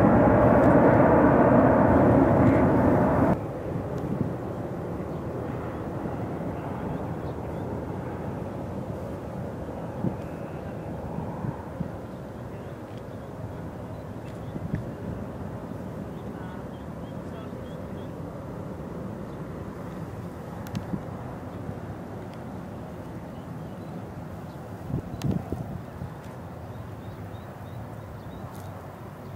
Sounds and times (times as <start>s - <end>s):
Fixed-wing aircraft, airplane: 0.0s - 29.3s.